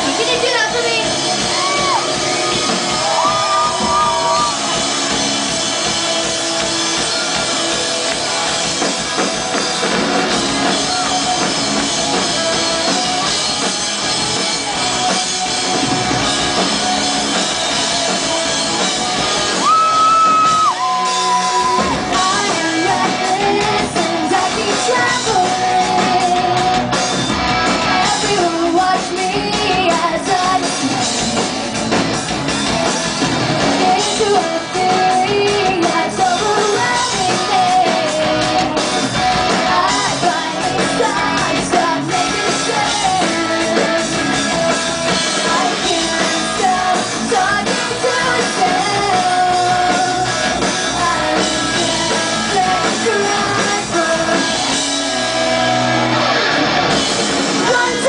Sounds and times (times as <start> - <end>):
Music: 0.0 - 58.0.